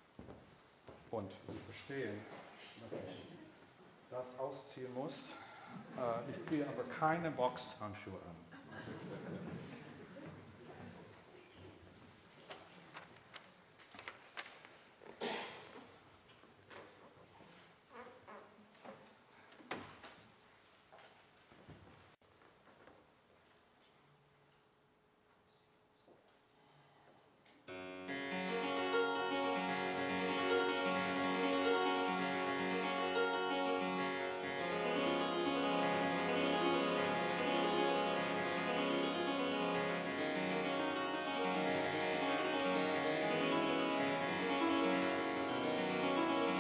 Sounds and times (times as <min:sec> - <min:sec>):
Harpsichord: 0:27.7 - 0:46.6.